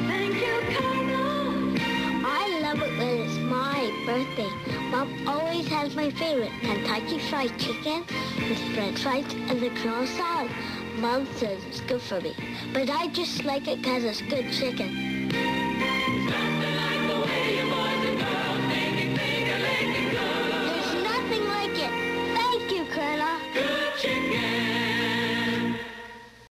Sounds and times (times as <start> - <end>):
Music: 0.0 - 26.5
Speech: 2.3 - 14.9, 20.7 - 23.4.